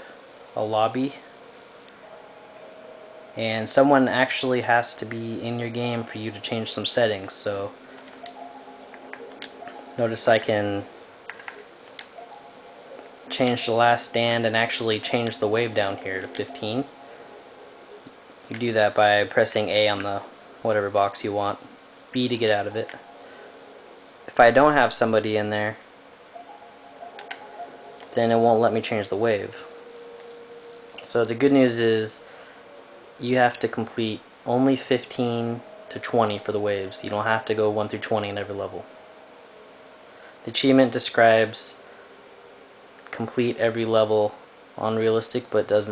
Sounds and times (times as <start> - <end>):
Speech: 0.6 - 1.3, 3.4 - 7.8, 10.0 - 10.9, 13.3 - 16.9, 18.5 - 21.6, 22.2 - 23.0, 24.3 - 25.8, 28.1 - 29.7, 31.0 - 32.2, 33.2 - 38.9, 40.5 - 41.8, 43.1 - 45.9.